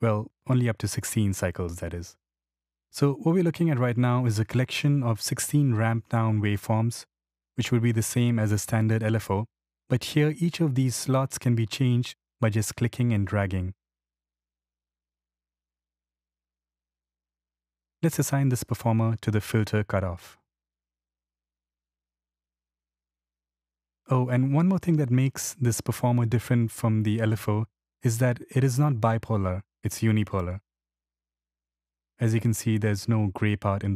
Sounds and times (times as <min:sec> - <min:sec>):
Speech: 0:00.0 - 0:02.2, 0:03.0 - 0:13.8, 0:18.0 - 0:20.4, 0:24.1 - 0:30.6, 0:32.2 - 0:33.9.